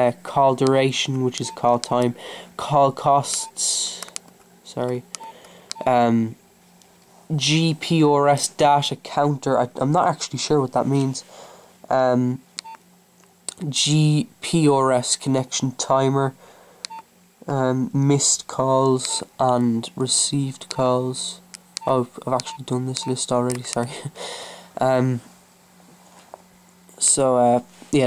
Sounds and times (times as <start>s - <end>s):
Speech: 0.0s - 4.1s, 4.7s - 5.0s, 5.8s - 6.4s, 7.3s - 11.3s, 11.9s - 12.4s, 13.5s - 16.4s, 17.4s - 24.2s, 24.8s - 25.3s, 26.9s - 28.0s.